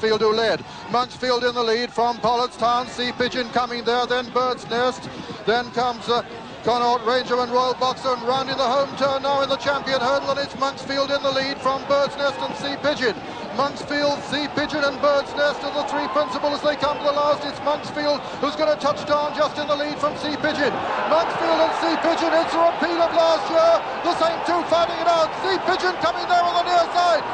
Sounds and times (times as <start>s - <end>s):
Speech: 0.0s - 27.3s.